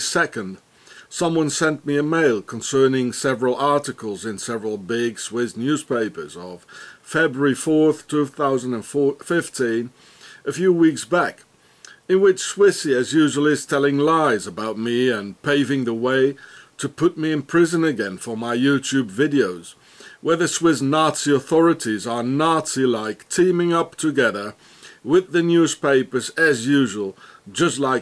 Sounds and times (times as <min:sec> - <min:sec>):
Male speech, man speaking: 0:00.0 - 0:11.4, 0:12.1 - 0:28.0.